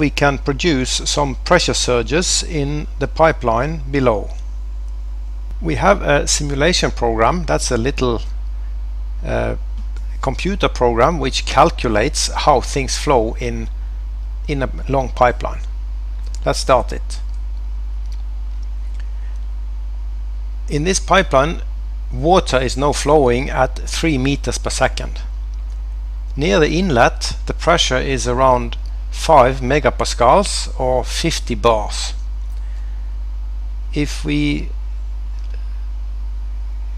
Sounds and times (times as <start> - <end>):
Speech: 0.0 - 4.4, 5.6 - 8.4, 9.2 - 13.7, 14.5 - 15.7, 16.3 - 17.3, 20.7 - 25.3, 26.4 - 32.2, 33.9 - 34.8.